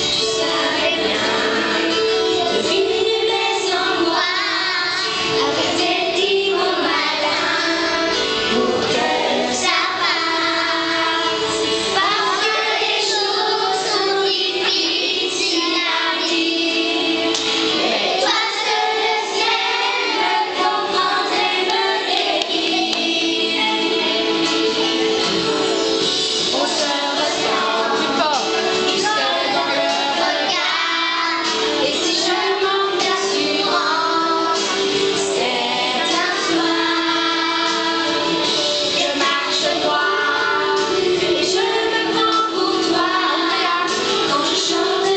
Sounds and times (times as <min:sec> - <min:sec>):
Music: 0:00.0 - 0:45.1.